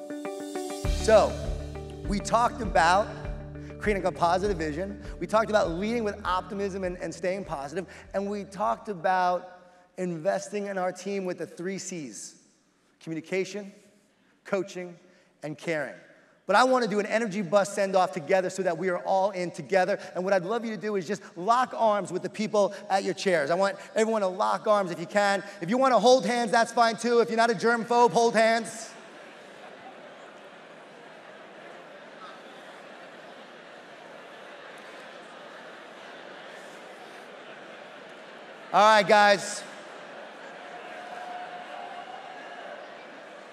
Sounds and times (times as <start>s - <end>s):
Speech: 1.0s - 1.4s, 2.1s - 3.2s, 3.8s - 12.4s, 13.0s - 13.8s, 14.4s - 29.0s, 38.7s - 39.8s.